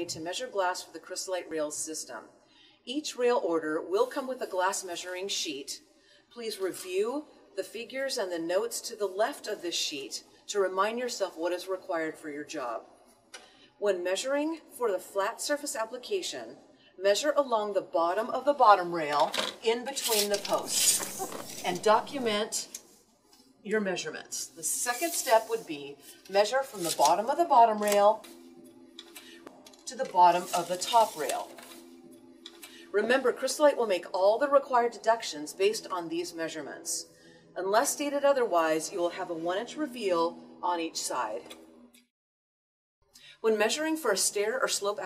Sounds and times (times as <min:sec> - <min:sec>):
Speech: 0:00.0 - 0:02.3, 0:02.9 - 0:05.8, 0:06.4 - 0:12.8, 0:13.8 - 0:22.8, 0:23.7 - 0:28.2, 0:29.9 - 0:31.6, 0:33.0 - 0:41.5, 0:43.4 - 0:45.0
Music: 0:17.6 - 0:42.1.